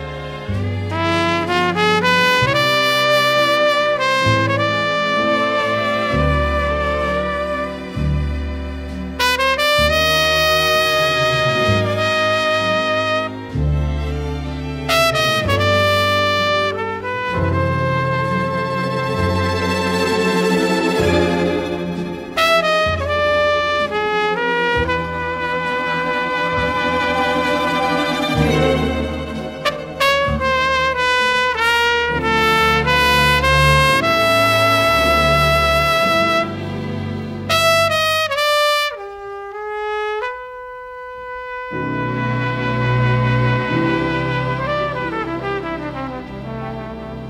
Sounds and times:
Music: 0:00.0 - 0:47.3.

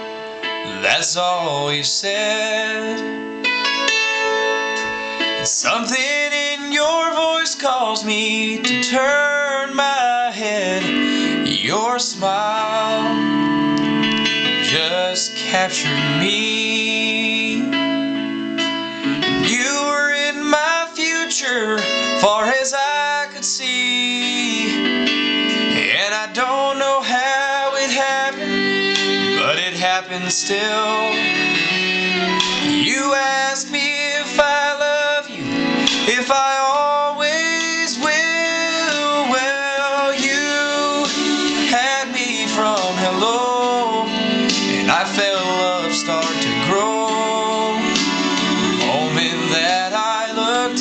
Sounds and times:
Blues: 0:00.0 - 0:50.8.

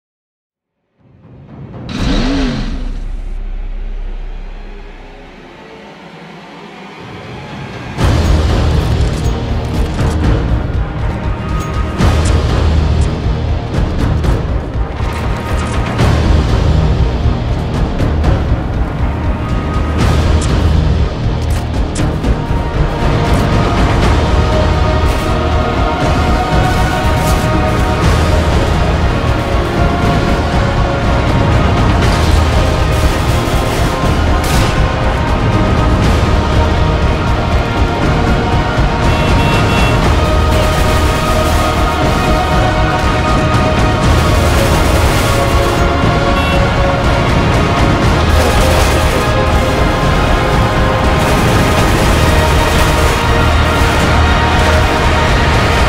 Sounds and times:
Music: 0:00.6 - 0:55.8.

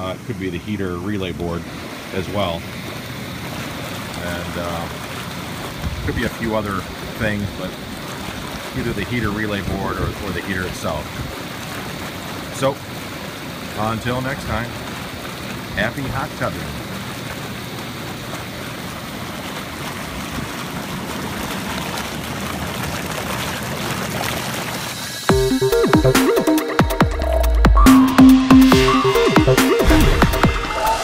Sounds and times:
Speech: 0:00.0 - 0:02.6, 0:04.2 - 0:04.9, 0:06.0 - 0:07.8, 0:08.8 - 0:11.1, 0:12.6 - 0:12.8, 0:13.7 - 0:14.8, 0:15.7 - 0:16.8
Bathtub (filling or washing): 0:00.0 - 0:27.3.

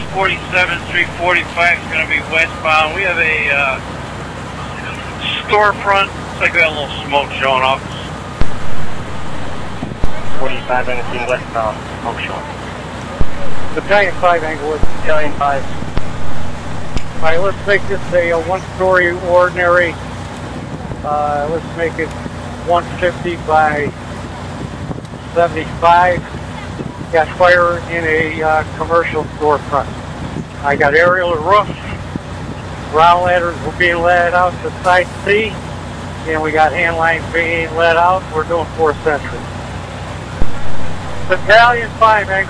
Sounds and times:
Speech: 0:00.0 - 0:03.8, 0:04.6 - 0:08.1, 0:10.0 - 0:15.8, 0:17.2 - 0:20.0, 0:21.1 - 0:22.1, 0:22.7 - 0:24.0, 0:25.4 - 0:26.3, 0:27.1 - 0:29.9, 0:30.6 - 0:32.0, 0:32.9 - 0:35.6, 0:36.3 - 0:39.5, 0:41.3 - 0:42.5.

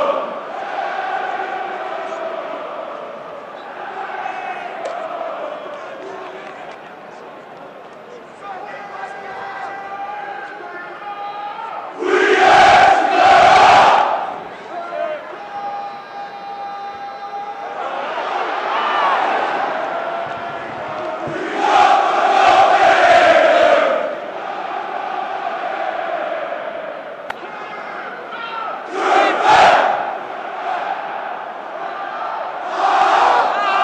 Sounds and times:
Speech: 0:05.4 - 0:12.0, 0:14.3 - 0:18.1, 0:27.4 - 0:28.9.

